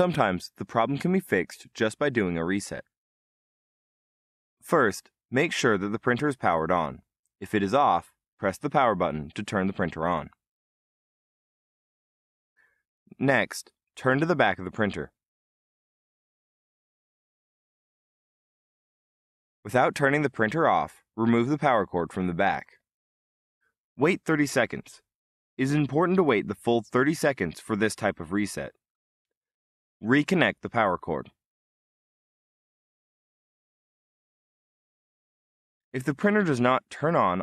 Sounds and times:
Speech: 0:00.0 - 0:02.9, 0:04.6 - 0:10.4, 0:13.1 - 0:15.2, 0:19.7 - 0:22.8, 0:24.0 - 0:28.8, 0:30.0 - 0:31.4, 0:36.0 - 0:37.4.

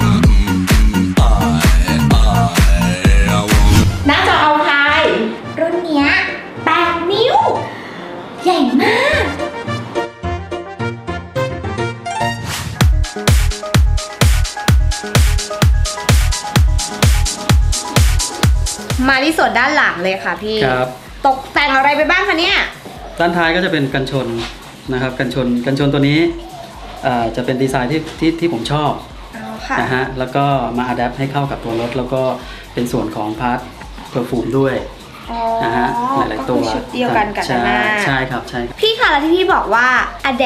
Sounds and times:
Music: 0:00.0 - 0:40.4.

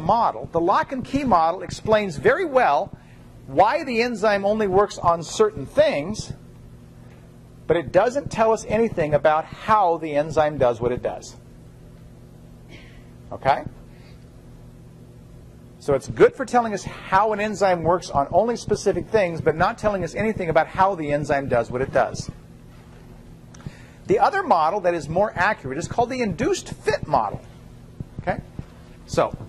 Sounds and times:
Speech: 0:00.0 - 0:02.9, 0:03.5 - 0:06.4, 0:07.7 - 0:11.4, 0:13.3 - 0:13.8, 0:15.8 - 0:22.4, 0:24.1 - 0:27.4, 0:28.2 - 0:28.5, 0:29.1 - 0:29.4.

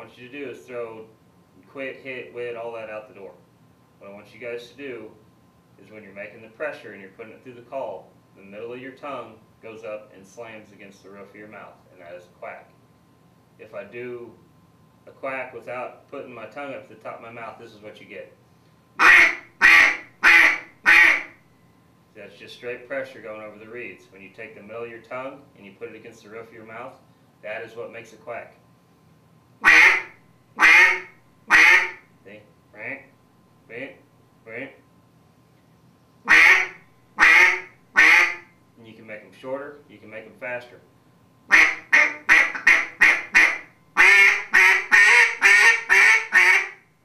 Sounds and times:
Speech: 0:00.0 - 0:03.4, 0:04.0 - 0:05.2, 0:05.8 - 0:12.8, 0:13.6 - 0:14.4, 0:15.0 - 0:18.4, 0:22.2 - 0:28.6, 0:32.2 - 0:33.1, 0:33.7 - 0:34.8, 0:38.8 - 0:40.9
Quack: 0:19.0 - 0:21.4, 0:29.6 - 0:32.0, 0:36.3 - 0:38.4, 0:41.5 - 0:46.8.

